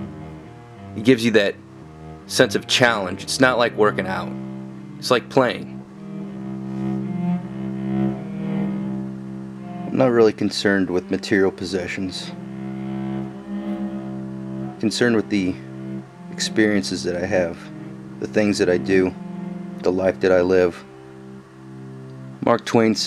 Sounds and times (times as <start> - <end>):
Double bass: 0.0 - 23.0.